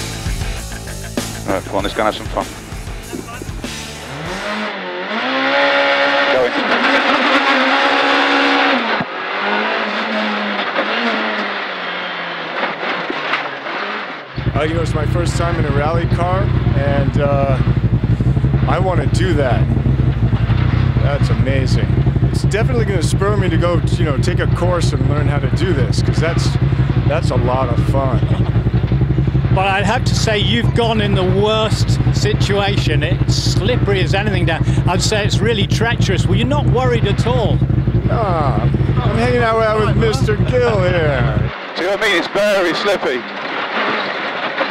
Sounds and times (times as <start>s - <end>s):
Vehicle: 0.0s - 44.7s
Speech: 1.4s - 2.5s, 6.3s - 6.6s, 14.4s - 17.6s, 18.7s - 19.7s, 21.0s - 28.4s, 29.6s - 43.3s.